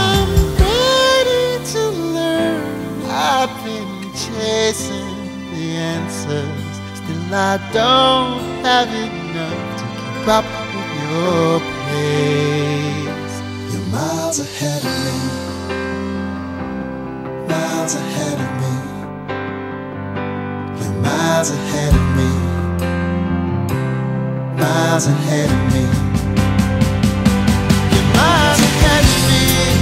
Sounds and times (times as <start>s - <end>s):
Music: 0.0s - 29.8s.